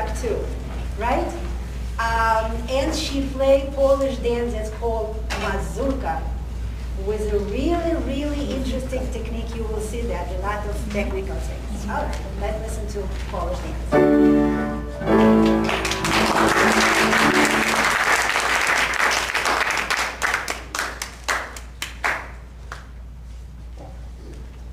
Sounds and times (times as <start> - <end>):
Speech: 0.0 - 6.3, 7.0 - 13.9.